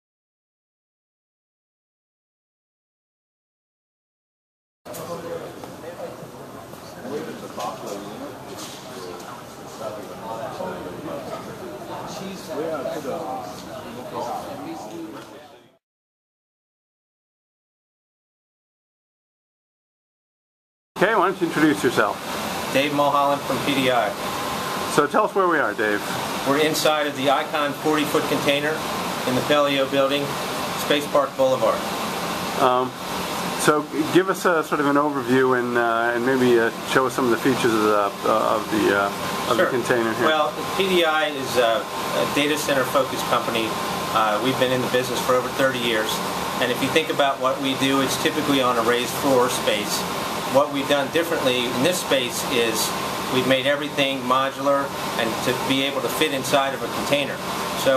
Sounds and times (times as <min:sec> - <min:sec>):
Speech: 0:04.9 - 0:15.8, 0:21.0 - 0:24.2, 0:24.9 - 0:31.9, 0:32.6 - 0:33.0, 0:33.6 - 0:57.9.